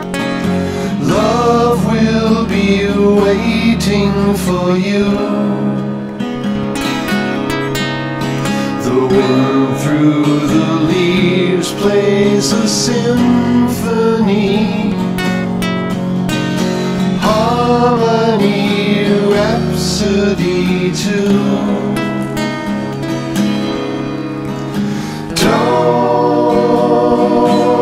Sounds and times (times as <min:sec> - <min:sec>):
Music: 0:00.0 - 0:27.8.